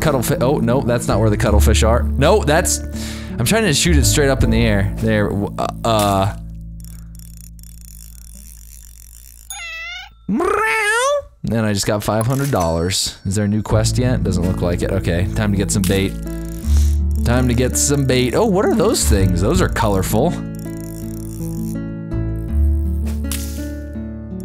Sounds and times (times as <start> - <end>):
Speech: 0.0 - 2.8, 3.4 - 6.4, 10.3 - 16.1, 17.3 - 20.4
Music: 0.0 - 7.9, 13.2 - 24.4.